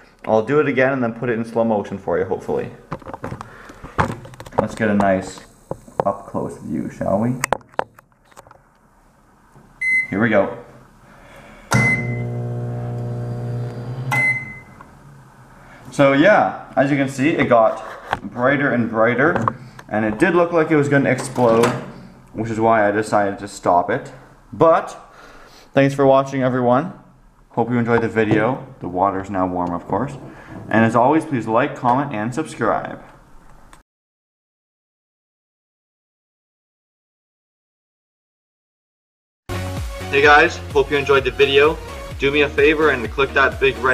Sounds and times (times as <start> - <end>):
Speech: 0.3 - 2.8, 4.6 - 7.4, 10.1 - 10.8, 15.9 - 21.8, 22.4 - 25.1, 25.8 - 27.0, 27.6 - 33.1, 40.1 - 43.9
Beep, bleep: 9.8 - 10.2, 11.8 - 12.2, 14.1 - 14.8.